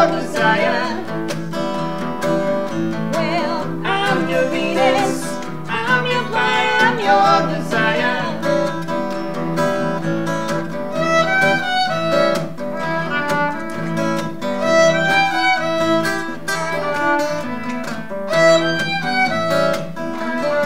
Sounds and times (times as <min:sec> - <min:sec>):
Violin, fiddle: 0:10.9 - 0:20.6.